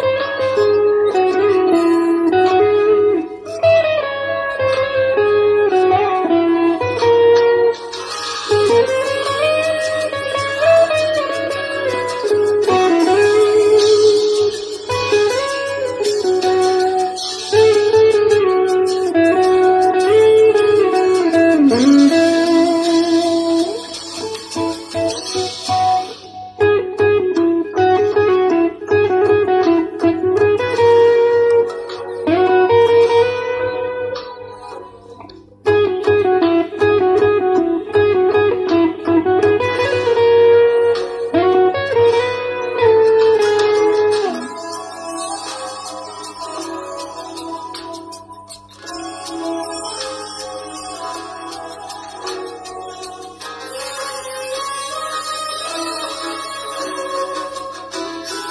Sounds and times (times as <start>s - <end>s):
Electric guitar: 0.0s - 58.5s.